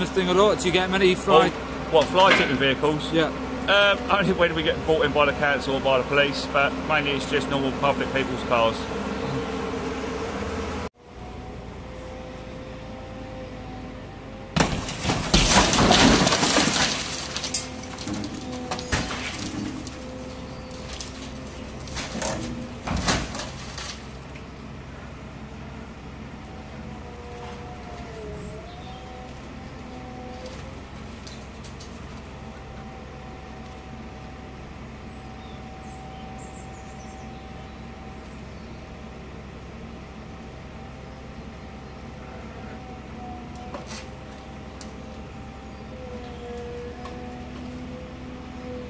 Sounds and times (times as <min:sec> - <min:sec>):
Speech: 0:00.0 - 0:08.9
Vehicle: 0:00.0 - 0:48.9.